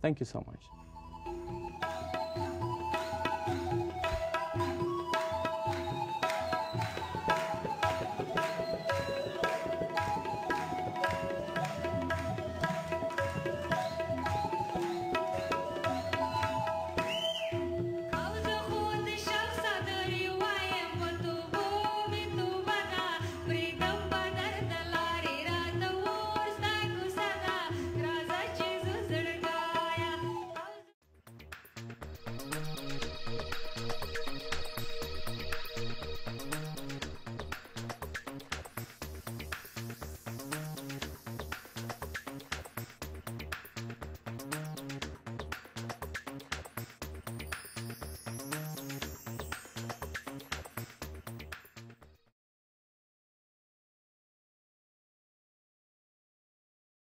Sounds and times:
Tabla: 1.2s - 52.0s.

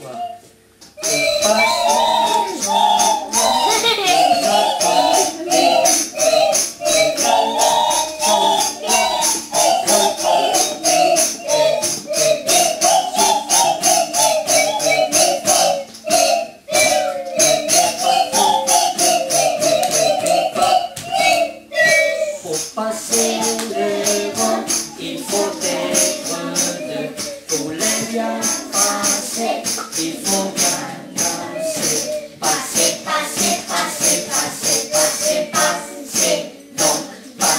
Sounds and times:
Music: 0.1s - 37.5s.

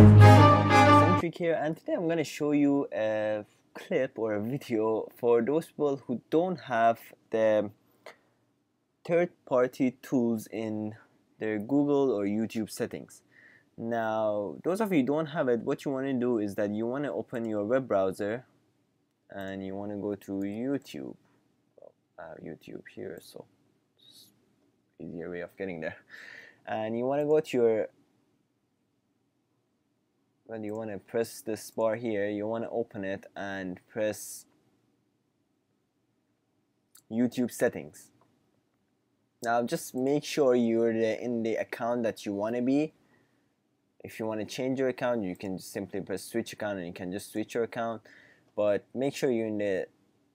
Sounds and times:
Speech: 1.2s - 7.8s, 9.0s - 13.2s, 13.8s - 18.5s, 19.3s - 21.2s, 21.8s - 23.5s, 25.0s - 26.1s, 26.7s - 27.9s, 30.5s - 34.5s, 37.0s - 38.1s, 39.4s - 43.0s, 44.0s - 49.9s.

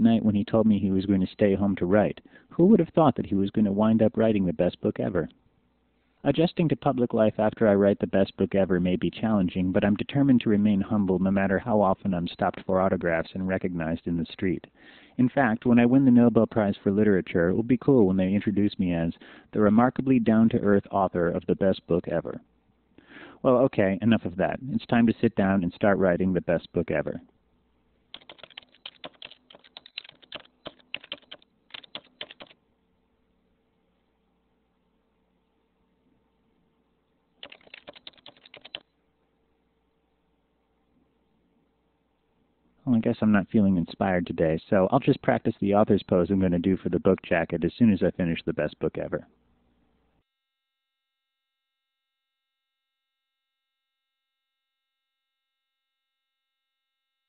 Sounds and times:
Speech: 0.0s - 5.4s, 6.2s - 22.5s, 23.4s - 27.3s, 42.8s - 49.3s.

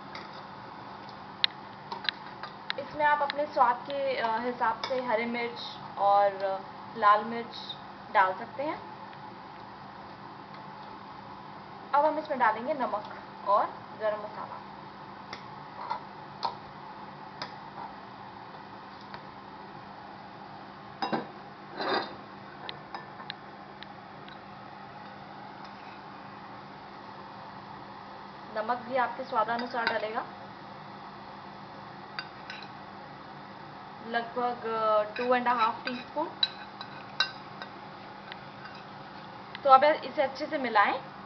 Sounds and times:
Speech: 2.8s - 8.8s, 12.0s - 14.6s, 28.5s - 30.3s, 34.0s - 36.4s, 39.6s - 41.0s.

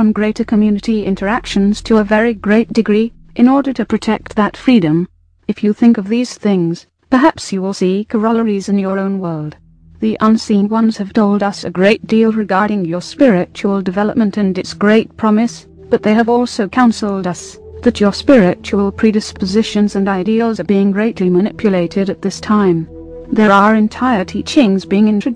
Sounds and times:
Speech: 0.0s - 25.3s.

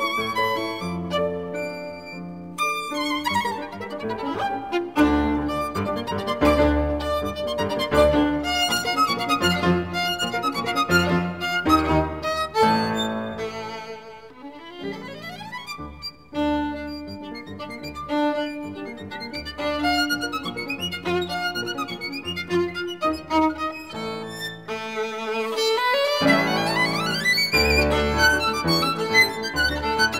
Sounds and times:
String section: 0.0s - 30.2s.

